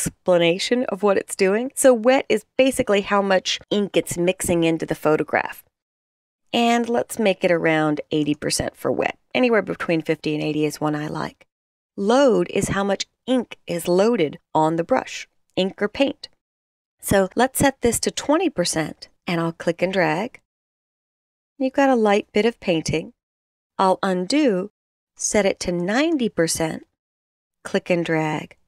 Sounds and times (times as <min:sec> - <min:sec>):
Speech: 0:00.0 - 0:05.7, 0:06.6 - 0:16.3, 0:17.0 - 0:20.4, 0:21.6 - 0:23.2, 0:23.8 - 0:26.9, 0:27.7 - 0:28.6.